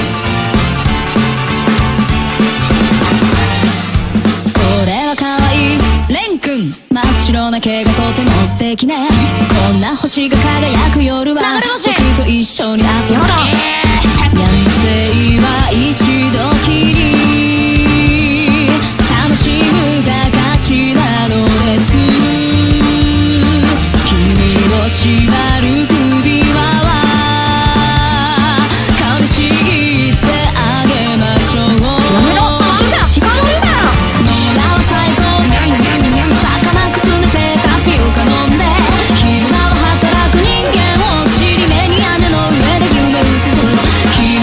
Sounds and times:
Music: 0:00.0 - 0:44.4
Speech: 0:04.7 - 0:14.4, 0:31.7 - 0:34.0.

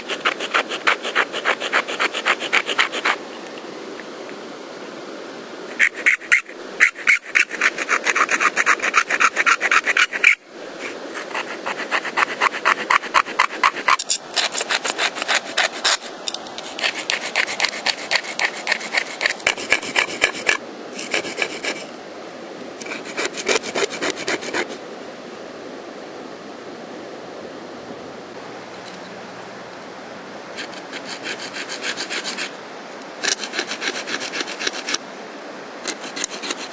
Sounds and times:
Filing (rasp): 0:00.0 - 0:03.2, 0:05.8 - 0:21.9, 0:22.8 - 0:24.8, 0:30.6 - 0:32.5, 0:33.2 - 0:35.0, 0:35.8 - 0:36.7
Rub: 0:00.0 - 0:03.2, 0:05.7 - 0:21.8, 0:22.8 - 0:24.8, 0:30.6 - 0:32.5, 0:33.2 - 0:35.0, 0:35.8 - 0:36.7.

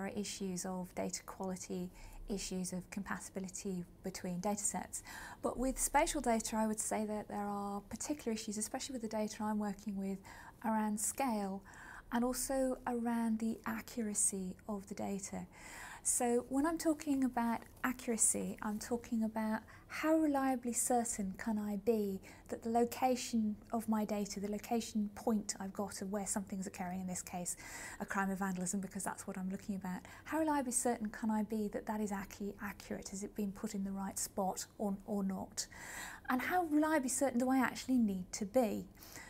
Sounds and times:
Speech: 0:00.0 - 0:35.7, 0:36.3 - 0:38.9.

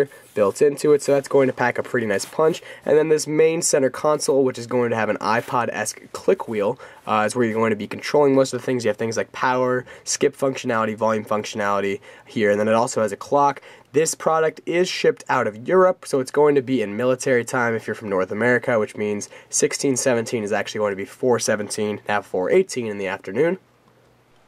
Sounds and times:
Speech: 0:00.0 - 0:23.6.

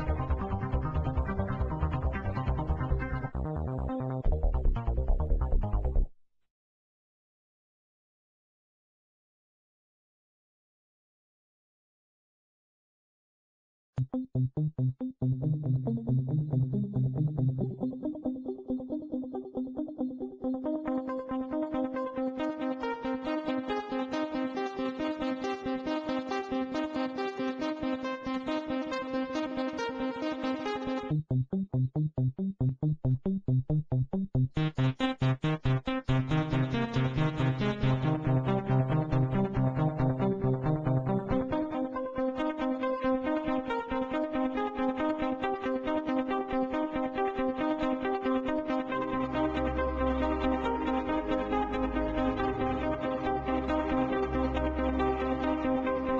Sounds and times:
Synthesizer: 0:00.0 - 0:06.1, 0:14.0 - 0:31.9, 0:34.5 - 0:56.1.

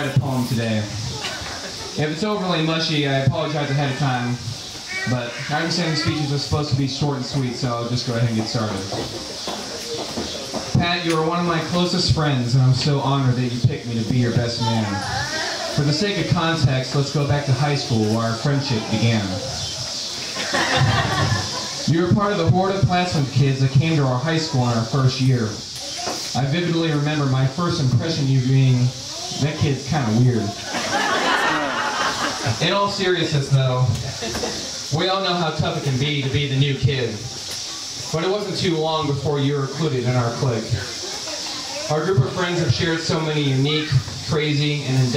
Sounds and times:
Speech: 0:00.0 - 0:01.0, 0:02.0 - 0:09.0, 0:10.7 - 0:19.6, 0:21.9 - 0:30.6, 0:32.5 - 0:34.0, 0:34.9 - 0:37.3, 0:38.1 - 0:45.1
Laughter: 0:01.1 - 0:02.0, 0:20.2 - 0:21.9, 0:30.6 - 0:32.6, 0:34.0 - 0:34.8.

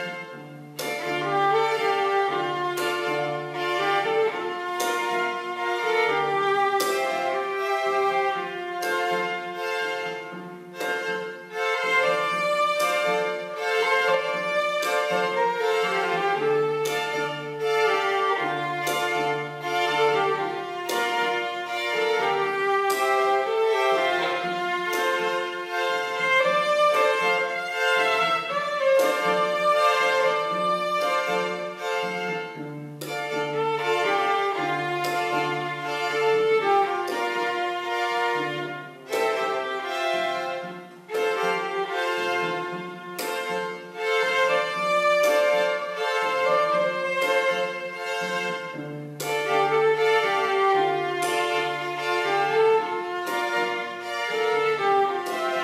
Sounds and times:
Bowed string instrument: 0:00.0 - 0:55.6
Inside, large room or hall: 0:00.0 - 0:55.6.

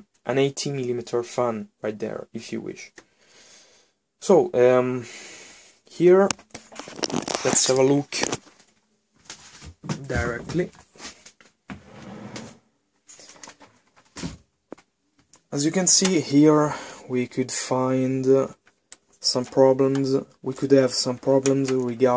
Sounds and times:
Speech: 0:00.0 - 0:03.0, 0:04.2 - 0:05.1, 0:05.9 - 0:06.4, 0:07.4 - 0:08.4, 0:09.9 - 0:10.8, 0:15.5 - 0:18.6, 0:19.2 - 0:22.1
Inside, small room: 0:00.0 - 0:22.1.

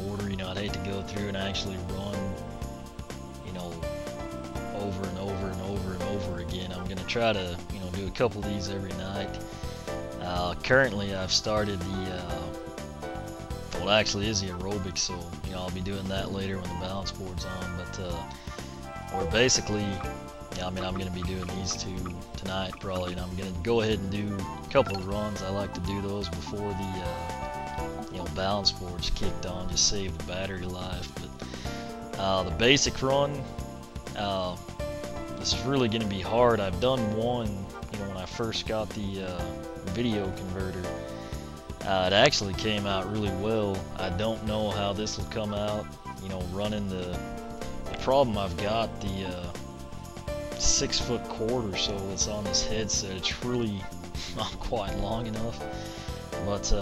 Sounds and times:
Speech: 0:00.0 - 0:02.4, 0:03.4 - 0:03.9, 0:04.7 - 0:09.4, 0:10.2 - 0:12.5, 0:13.7 - 0:18.4, 0:19.1 - 0:27.3, 0:28.1 - 0:31.4, 0:32.2 - 0:33.5, 0:34.2 - 0:34.6, 0:35.4 - 0:41.0, 0:41.8 - 0:47.2, 0:47.9 - 0:49.6, 0:50.6 - 0:55.6, 0:56.4 - 0:56.8
Music: 0:00.0 - 0:56.8.

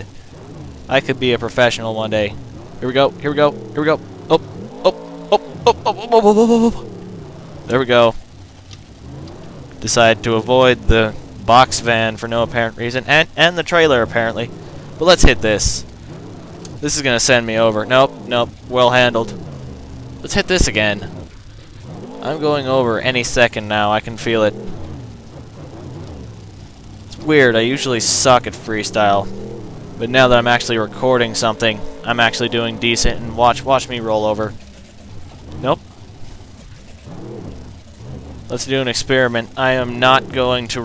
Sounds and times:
Vehicle: 0:00.0 - 0:40.8.

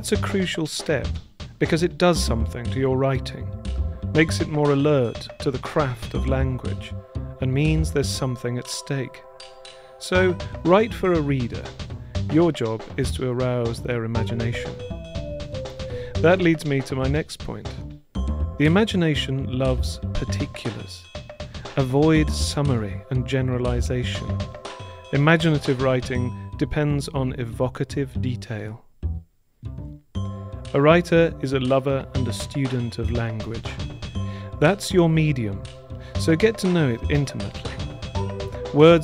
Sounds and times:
Speech: 0:00.0 - 0:03.6, 0:04.2 - 0:09.2, 0:10.0 - 0:14.8, 0:16.2 - 0:17.8, 0:18.6 - 0:21.1, 0:21.7 - 0:24.3, 0:25.1 - 0:28.9, 0:30.7 - 0:33.9, 0:34.6 - 0:35.6, 0:36.2 - 0:37.9, 0:38.7 - 0:39.0
Music: 0:00.0 - 0:39.0.

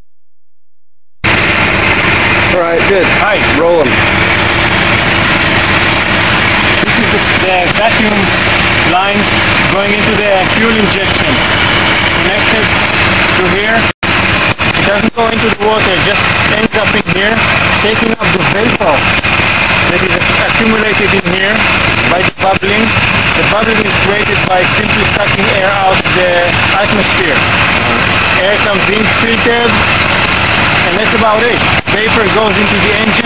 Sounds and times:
Vehicle: 0:01.2 - 0:33.2
Speech: 0:02.5 - 0:04.0, 0:06.8 - 0:11.5, 0:12.2 - 0:12.7, 0:13.4 - 0:13.9, 0:14.8 - 0:19.0, 0:19.9 - 0:29.8, 0:30.8 - 0:33.2.

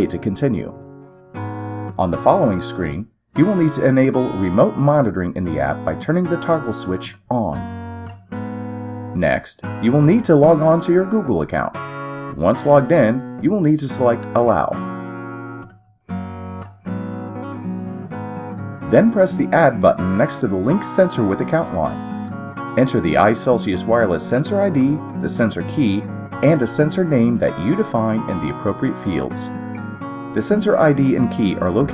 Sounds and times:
Speech: 0:00.0 - 0:00.8, 0:02.0 - 0:07.6, 0:09.2 - 0:14.8, 0:18.9 - 0:22.0, 0:22.8 - 0:29.5, 0:30.4 - 0:31.9
Music: 0:00.0 - 0:31.9.

